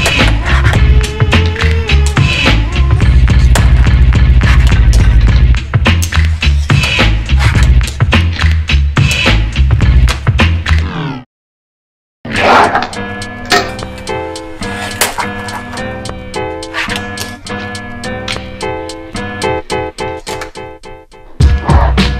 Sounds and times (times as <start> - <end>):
Music: 0.0 - 11.1, 12.3 - 22.1.